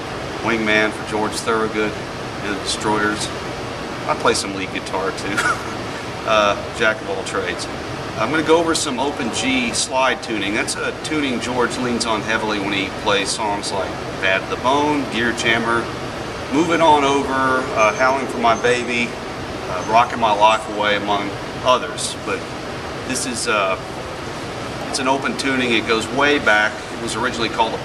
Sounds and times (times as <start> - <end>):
Speech: 0.4 - 3.4, 4.1 - 15.9, 16.5 - 22.4, 23.1 - 23.8, 24.9 - 27.8.